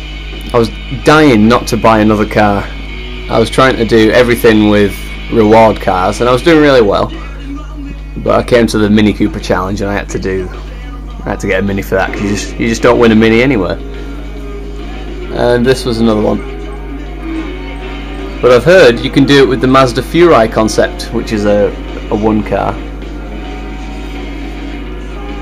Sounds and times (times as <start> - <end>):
Music: 0.0 - 25.4
Speech: 0.5 - 2.7, 3.3 - 10.6, 11.2 - 13.8, 15.3 - 16.5, 18.4 - 22.8.